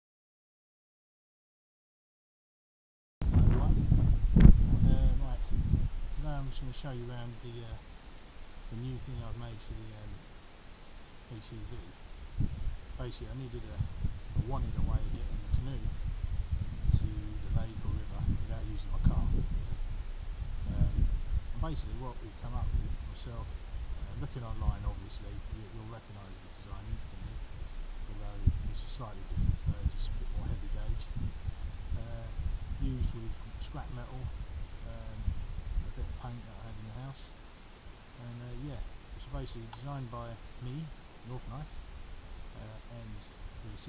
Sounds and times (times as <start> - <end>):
Speech: 3.4 - 3.9, 4.8 - 5.5, 6.1 - 7.8, 8.7 - 10.2, 11.3 - 12.0, 13.0 - 15.9, 16.9 - 19.4, 20.7 - 21.0, 21.6 - 27.4, 28.1 - 31.2, 32.0 - 35.3, 35.9 - 37.4, 38.2 - 41.8, 42.6 - 43.8.